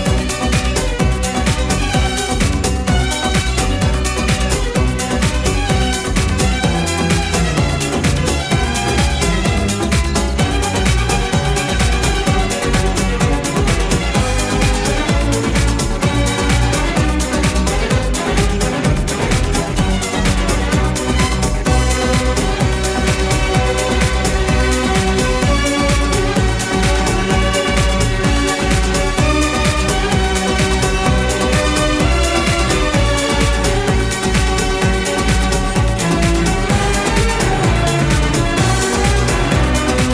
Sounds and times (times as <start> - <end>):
Dance music: 0.0 - 40.1
Soundtrack music: 0.0 - 40.1.